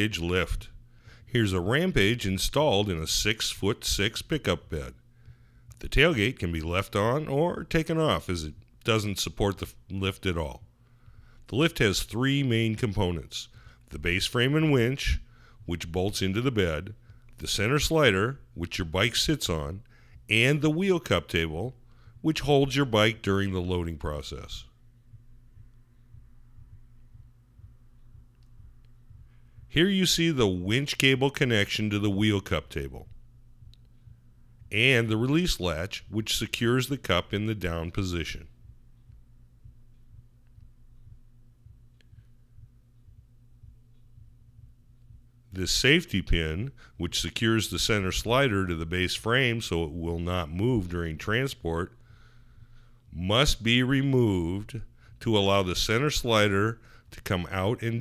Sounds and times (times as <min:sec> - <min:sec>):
Speech: 0:00.0 - 0:05.0, 0:05.8 - 0:10.7, 0:11.5 - 0:24.8, 0:29.7 - 0:33.2, 0:34.7 - 0:38.6, 0:45.5 - 0:52.0, 0:53.1 - 0:58.0.